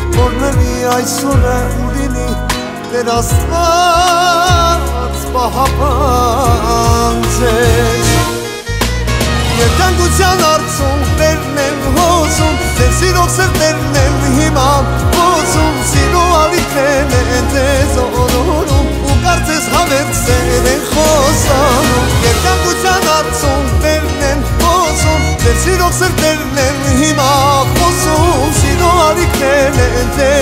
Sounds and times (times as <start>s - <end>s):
Music: 0.0s - 30.4s.